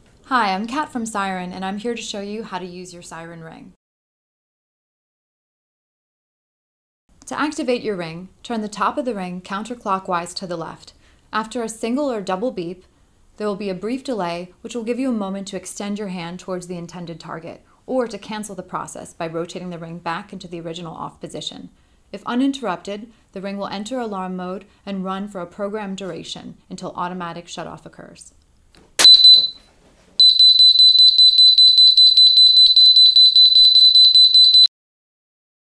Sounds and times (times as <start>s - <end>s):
Speech: 0.3s - 3.8s, 7.2s - 12.8s, 13.4s - 28.4s.